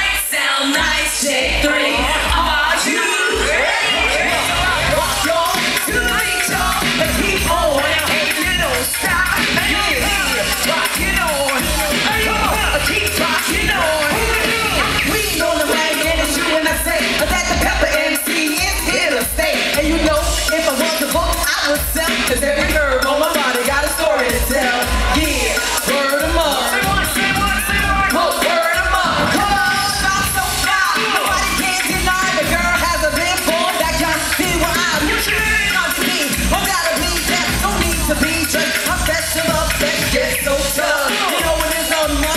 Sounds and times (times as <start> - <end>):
Music: 0.0 - 42.3.